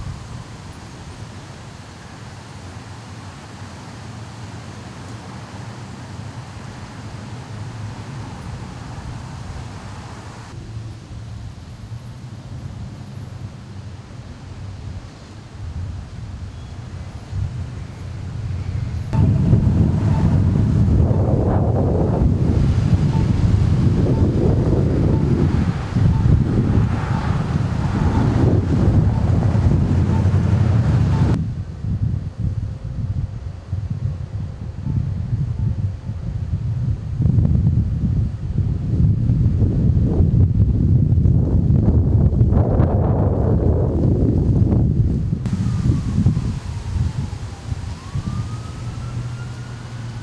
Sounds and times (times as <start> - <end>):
Outside, urban or manmade: 0.0 - 50.2
Rustling leaves: 0.0 - 50.2
Wind noise (microphone): 17.3 - 50.2.